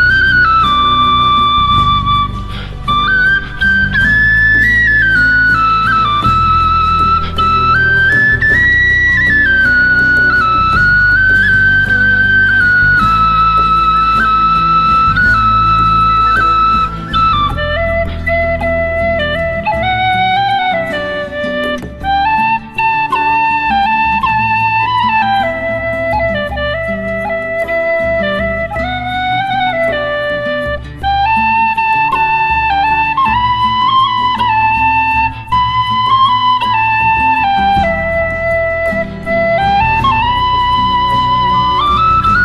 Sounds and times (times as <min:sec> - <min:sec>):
Flute: 0:00.0 - 0:42.4.